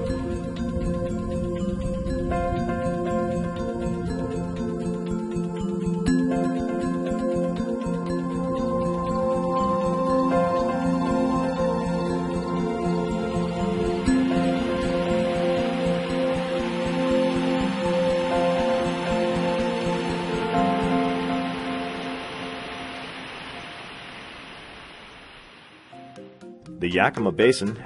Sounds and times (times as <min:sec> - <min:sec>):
Stream: 0:13.8 - 0:26.0.